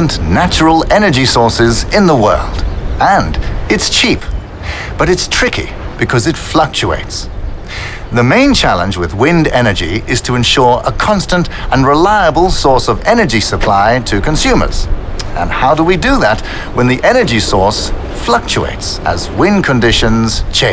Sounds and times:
Speech: 0.0s - 7.3s, 8.1s - 20.7s.

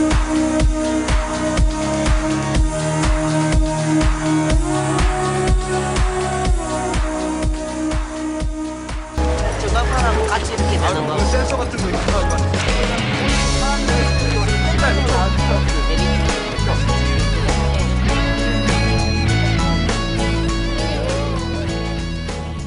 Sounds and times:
Music: 0.0s - 22.6s
Speech: 9.3s - 16.8s.

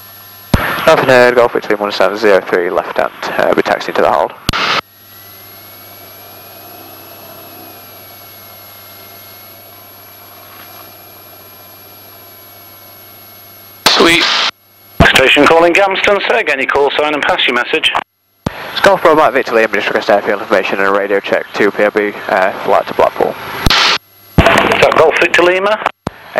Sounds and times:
Speech: 0.8s - 4.4s, 13.9s - 14.2s, 15.0s - 18.0s, 18.8s - 23.4s, 24.7s - 26.3s.

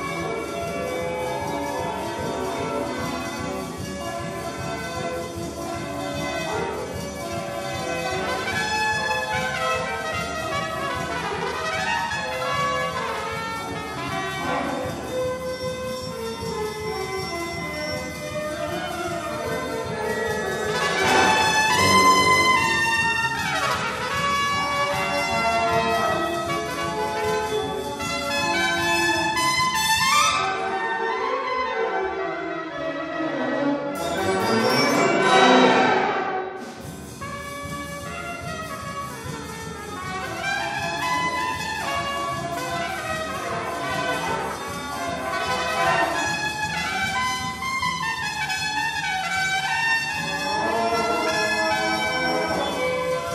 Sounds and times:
Classical music: 0.0s - 53.3s
Orchestra: 0.0s - 53.3s
Trumpet: 0.0s - 53.3s.

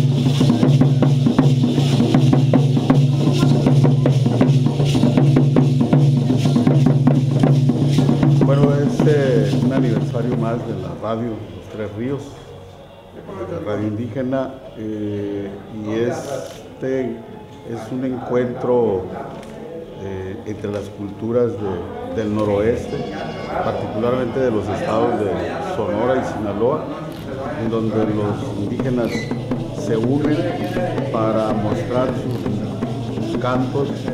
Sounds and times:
Speech: 8.4s - 12.6s, 13.2s - 34.1s.

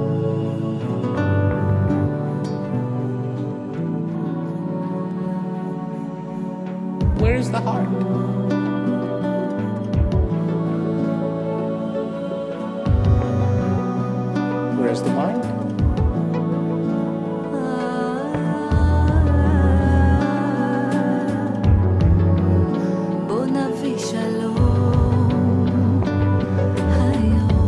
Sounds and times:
Music: 0.0s - 27.6s
Speech: 7.2s - 8.1s, 14.7s - 15.6s.

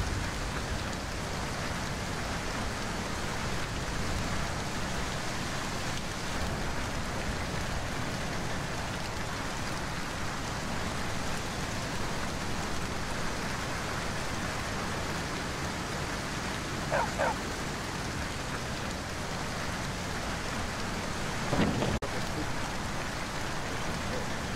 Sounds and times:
Rain on surface: 0.0s - 24.5s.

